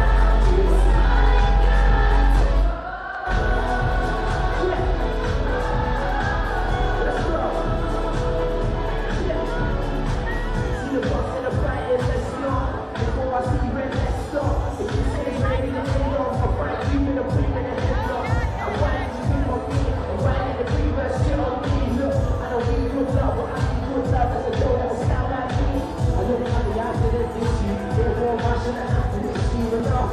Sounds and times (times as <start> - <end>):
Music: 0.0 - 30.1
Speech: 10.9 - 30.1.